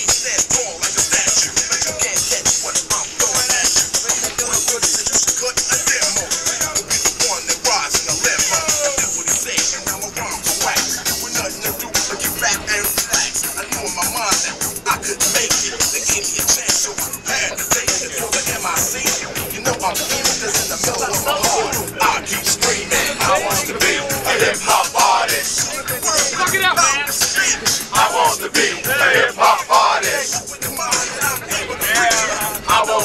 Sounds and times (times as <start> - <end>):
Music: 0.0 - 33.0
Speech: 19.7 - 24.5, 25.6 - 27.7.